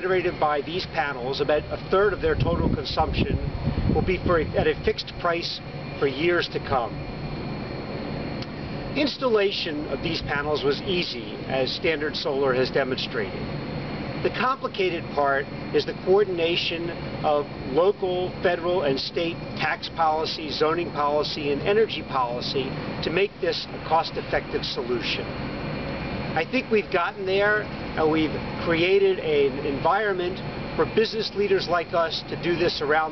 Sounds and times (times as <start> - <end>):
Speech: 0.0 - 7.0, 9.0 - 13.4, 14.2 - 25.3, 26.4 - 33.1.